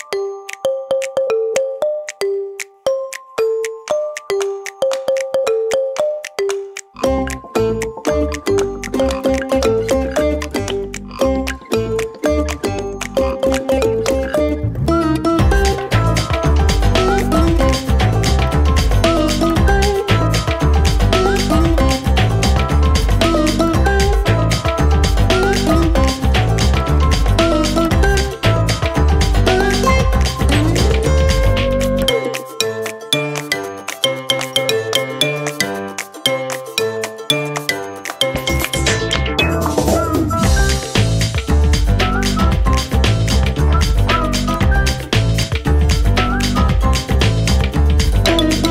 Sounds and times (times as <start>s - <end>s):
Music: 0.0s - 48.7s.